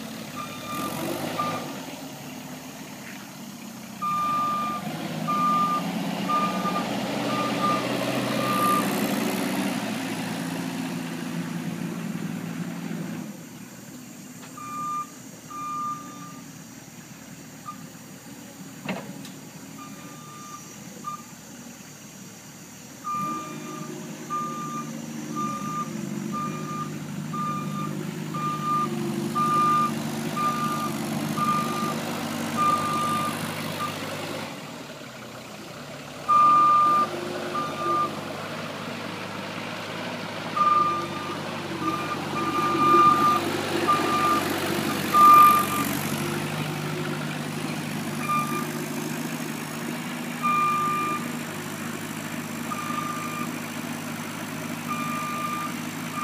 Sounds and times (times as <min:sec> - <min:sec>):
Reversing beeps: 0:00.4 - 0:01.7, 0:04.0 - 0:09.0, 0:14.6 - 0:16.5, 0:19.8 - 0:21.3, 0:23.1 - 0:32.0, 0:32.6 - 0:34.0, 0:36.3 - 0:38.2, 0:40.6 - 0:46.0, 0:48.2 - 0:48.8, 0:50.4 - 0:51.3, 0:52.7 - 0:53.6, 0:54.9 - 0:56.2.